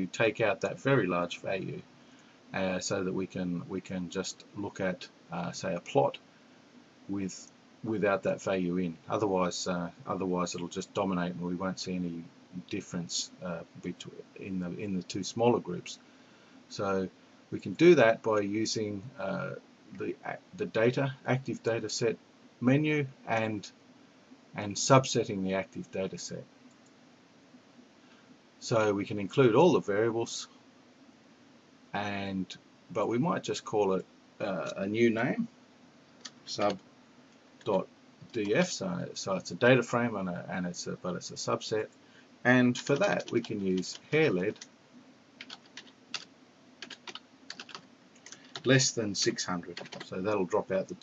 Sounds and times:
Speech: 0.0 - 1.9, 2.5 - 6.2, 7.1 - 16.0, 16.7 - 23.7, 24.6 - 26.5, 28.6 - 30.5, 32.0 - 35.5, 36.5 - 36.8, 37.7 - 41.9, 42.5 - 44.6, 48.6 - 51.0.

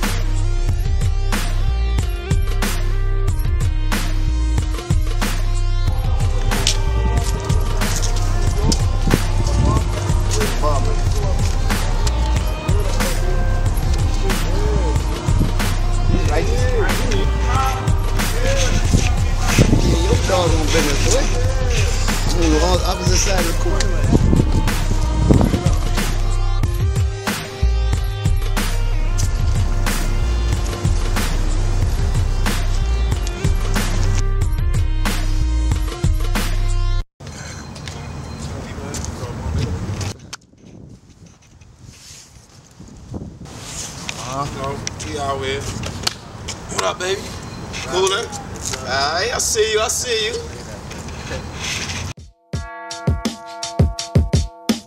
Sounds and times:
Outside, urban or manmade: 0.0 - 54.8
Speech: 19.4 - 24.2, 37.9 - 39.8, 44.2 - 45.7, 46.7 - 51.0.

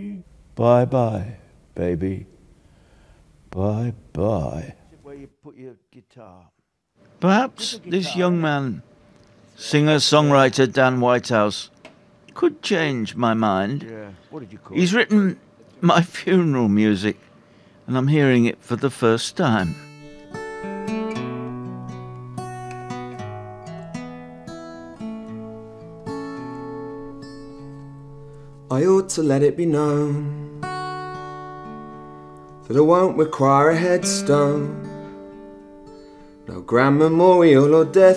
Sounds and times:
Speech: 0.0 - 2.3, 3.6 - 6.5, 7.2 - 8.8, 9.6 - 11.7, 12.4 - 17.2, 17.9 - 19.8
Music: 19.4 - 38.1.

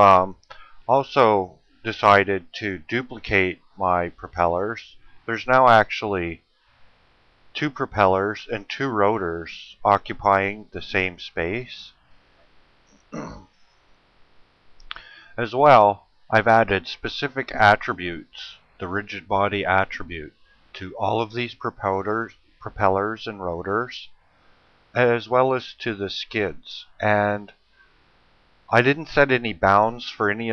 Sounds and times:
Speech: 0.0 - 6.4, 7.6 - 11.9, 13.2 - 13.4, 14.9 - 24.1, 25.0 - 27.5, 28.7 - 30.5.

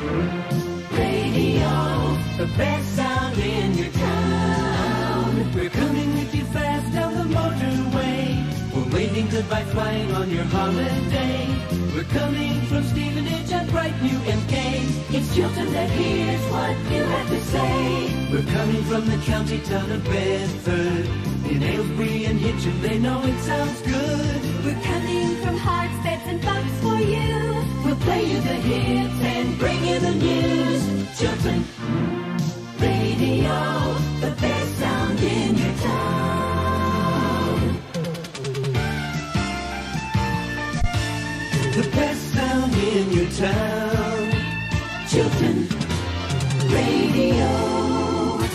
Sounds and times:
Music: 0.0 - 48.5.

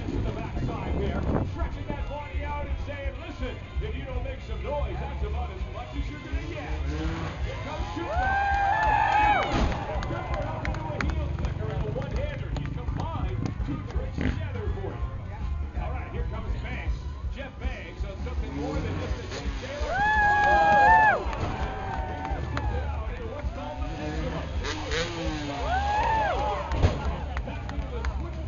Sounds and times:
Speech: 0.0 - 8.3, 9.8 - 21.0, 22.4 - 28.4
Motor vehicle (road): 0.0 - 28.4.

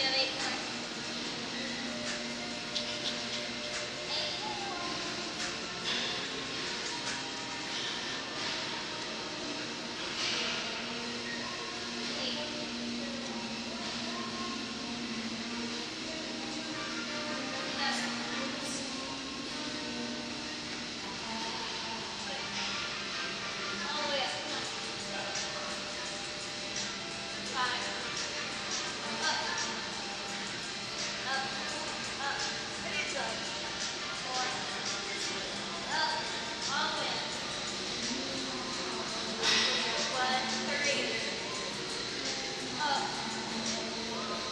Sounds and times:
Inside, large room or hall: 0.0 - 44.5
Music: 0.0 - 44.5.

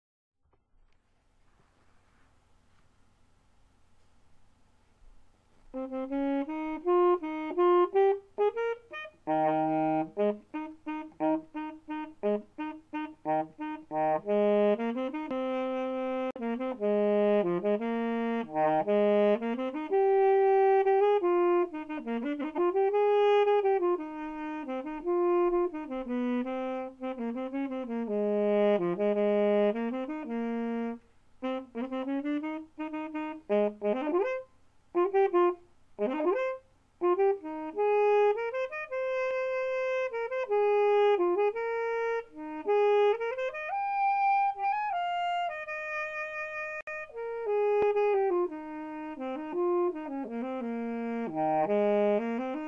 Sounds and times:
Saxophone: 5.5 - 52.6
Brass instrument: 5.7 - 52.6.

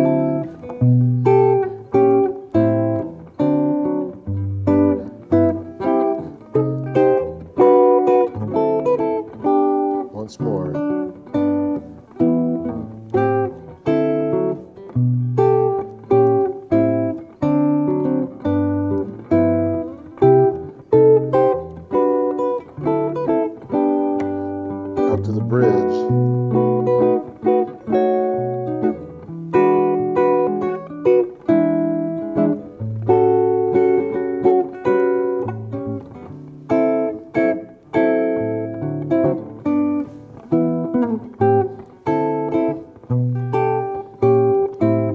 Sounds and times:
Guitar: 0.0 - 45.1
Speech: 10.1 - 10.9, 25.1 - 26.2.

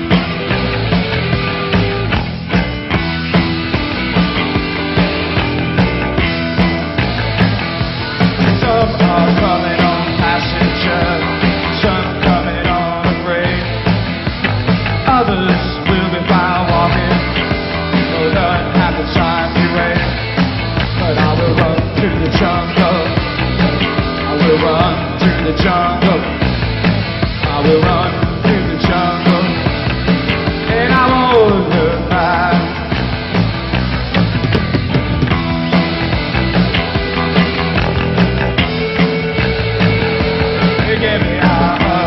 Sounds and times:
Music: 0.0 - 42.0.

